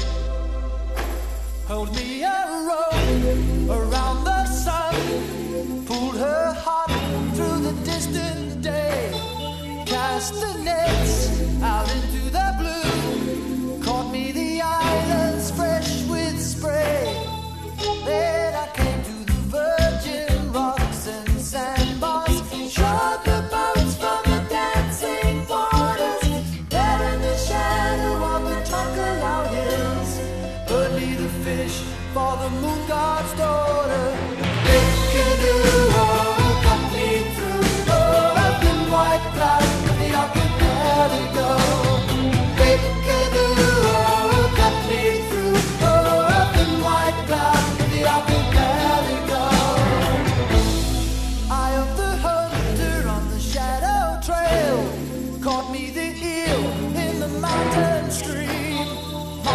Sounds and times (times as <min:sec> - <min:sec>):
Music: 0:00.0 - 0:59.5.